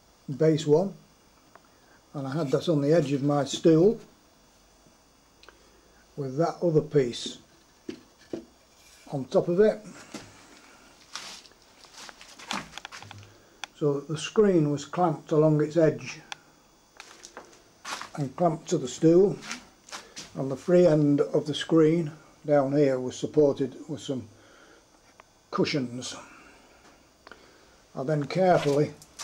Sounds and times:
Speech: 0.3 - 1.0, 2.1 - 4.1, 6.2 - 7.5, 9.1 - 9.9, 13.8 - 16.3, 18.1 - 19.6, 20.4 - 24.3, 25.5 - 26.3, 28.0 - 29.0.

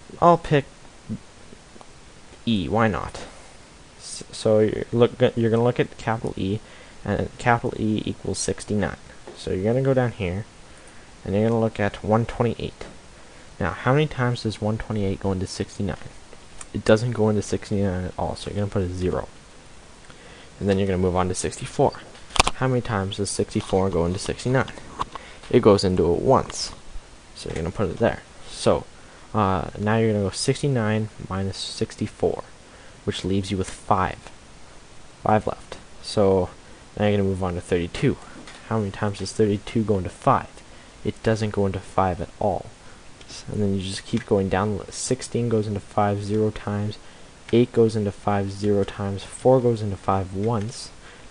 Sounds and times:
Speech: 0.1 - 1.2, 2.4 - 3.4, 4.0 - 10.5, 11.2 - 13.0, 13.6 - 19.3, 20.6 - 24.8, 25.5 - 26.8, 27.4 - 34.3, 35.2 - 51.0.

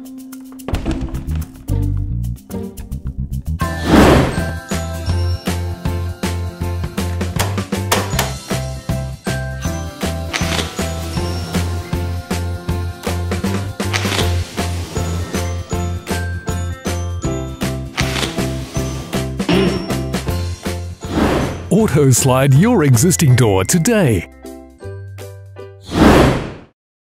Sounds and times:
Music: 0.0 - 26.2
Sliding door: 3.8 - 4.6, 13.8 - 16.0, 17.9 - 20.2
Speech: 21.7 - 24.3.

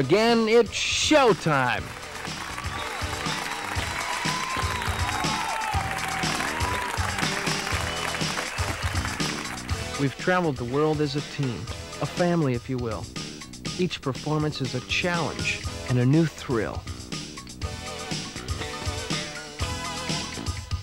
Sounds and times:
Speech: 0.0 - 1.9, 10.0 - 13.1, 13.8 - 16.8
Music: 0.0 - 20.8.

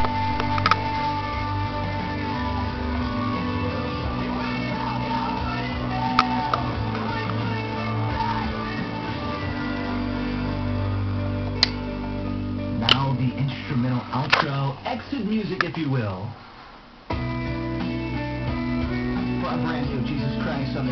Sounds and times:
Music: 0.0 - 15.6, 17.1 - 20.9
Speech: 12.8 - 16.4, 19.4 - 20.9.

